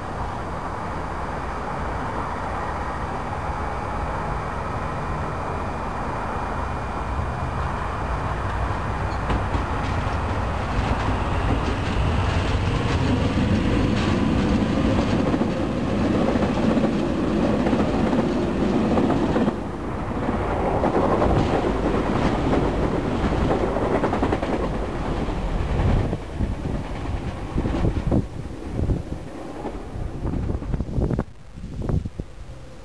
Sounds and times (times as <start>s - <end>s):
Railroad car, train wagon: 0.0s - 32.8s
Subway, metro, underground: 0.0s - 32.8s
Train: 0.0s - 32.8s
Clickety-clack: 9.1s - 15.6s, 20.6s - 28.2s.